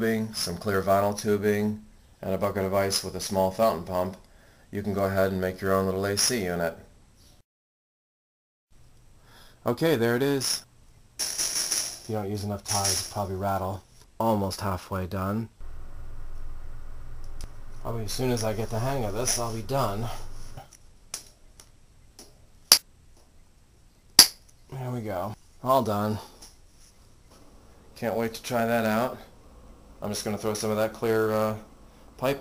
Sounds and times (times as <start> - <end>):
Speech: 0.0 - 6.9, 9.6 - 10.6, 12.1 - 15.6, 17.8 - 20.2, 24.7 - 26.4, 28.0 - 29.3, 30.0 - 32.4.